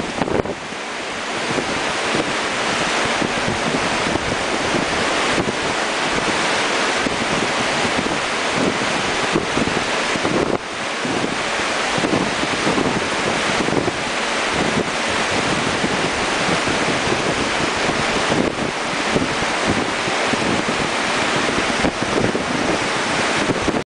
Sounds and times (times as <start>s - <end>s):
Rain on surface: 0.0s - 23.8s
Thunderstorm: 1.3s - 23.8s.